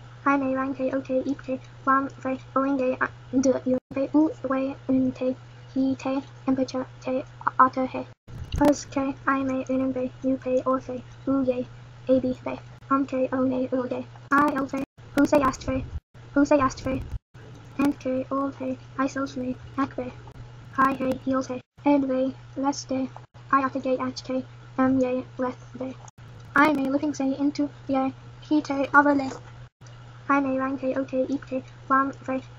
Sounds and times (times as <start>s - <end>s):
Speech: 0.3s - 17.1s, 17.8s - 20.2s, 20.8s - 26.0s, 26.6s - 29.4s, 30.3s - 32.5s.